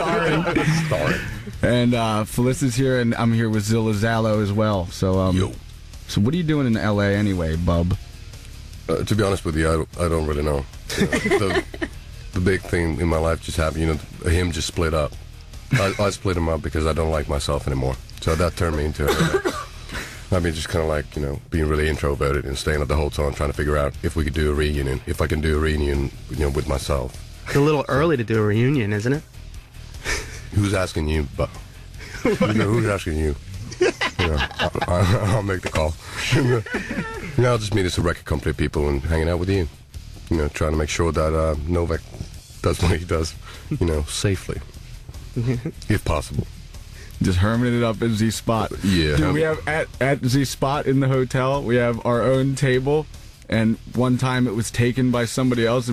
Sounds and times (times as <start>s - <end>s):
Speech: 0.0s - 8.0s, 8.9s - 11.8s, 12.4s - 19.4s, 20.3s - 29.2s, 30.5s - 31.6s, 32.3s - 44.7s, 45.4s - 46.5s, 47.2s - 55.9s
Music: 0.0s - 55.9s.